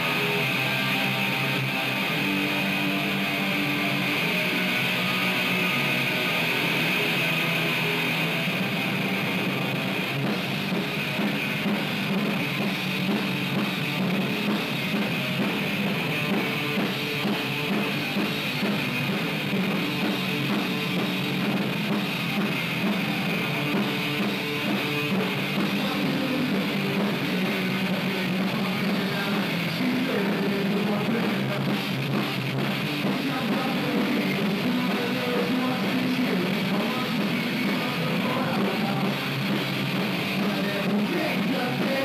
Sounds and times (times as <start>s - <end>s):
Music: 0.0s - 42.0s.